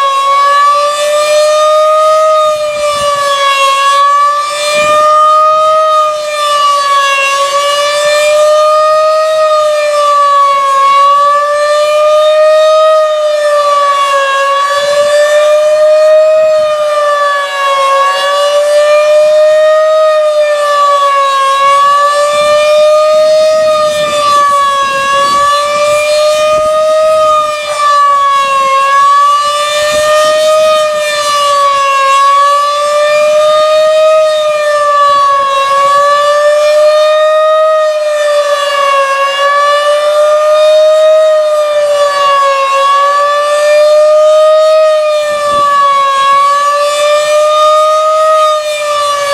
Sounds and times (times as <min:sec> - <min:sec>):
Siren: 0:00.0 - 0:49.3.